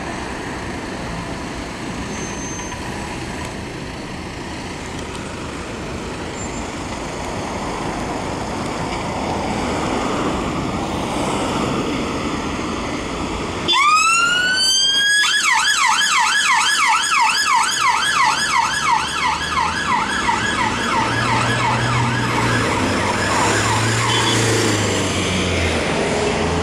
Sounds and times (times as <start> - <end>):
Police car (siren): 13.6 - 24.9.